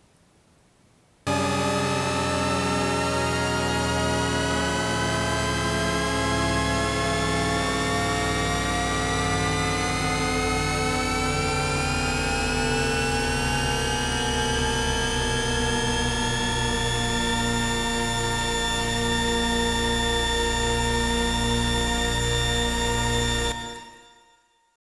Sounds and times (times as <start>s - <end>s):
Music: 1.3s - 24.8s.